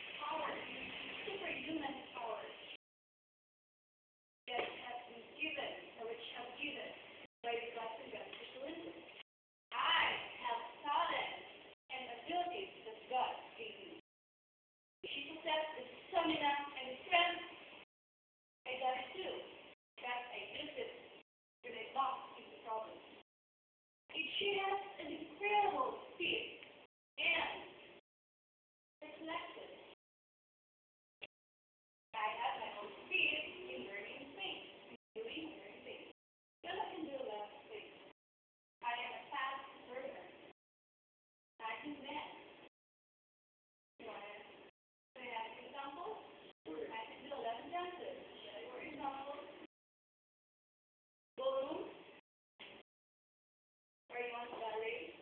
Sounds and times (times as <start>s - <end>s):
Narration, monologue: 0.0s - 2.8s, 4.5s - 14.1s, 15.0s - 17.9s, 18.5s - 23.3s, 24.1s - 28.0s, 32.2s - 40.6s, 41.6s - 42.7s, 44.0s - 49.8s, 54.1s - 55.2s
Female speech, woman speaking: 0.2s - 2.7s, 4.5s - 9.1s, 9.8s - 14.0s, 15.1s - 17.6s, 18.7s - 21.0s, 21.6s - 23.1s, 24.1s - 26.6s, 27.2s - 27.7s, 29.0s - 29.8s, 32.2s - 38.0s, 38.8s - 40.4s, 41.6s - 42.5s, 44.0s - 44.6s, 45.2s - 49.7s, 51.4s - 52.0s, 54.1s - 55.2s.